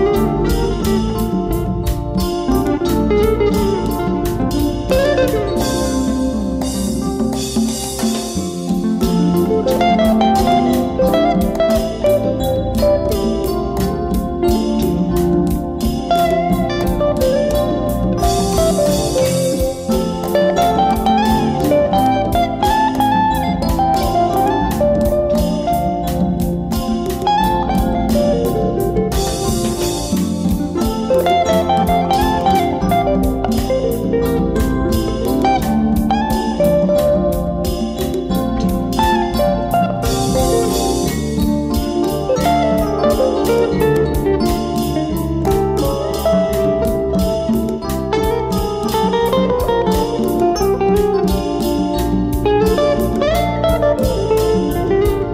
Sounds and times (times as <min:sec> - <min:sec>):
Guitar: 0:00.0 - 0:55.3.